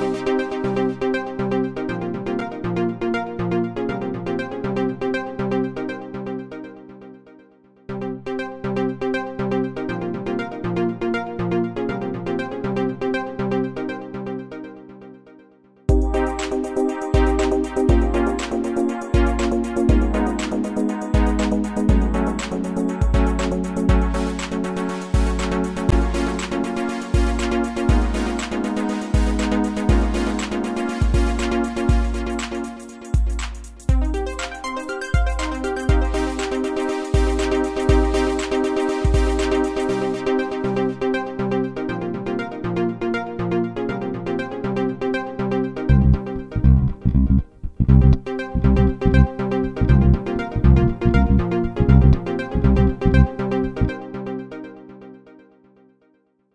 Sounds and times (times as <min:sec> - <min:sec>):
Music: 0:00.0 - 0:56.5.